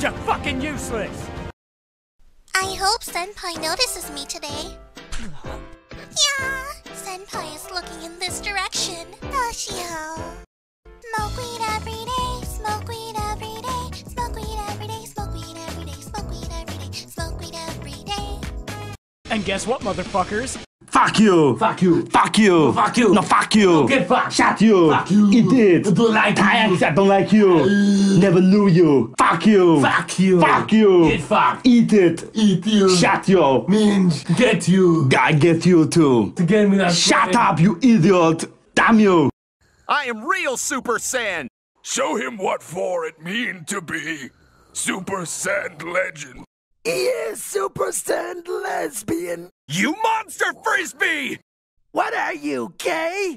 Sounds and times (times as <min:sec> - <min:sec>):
Speech: 0:00.0 - 0:01.2, 0:19.3 - 0:39.3, 0:39.9 - 0:51.4, 0:52.0 - 0:53.3.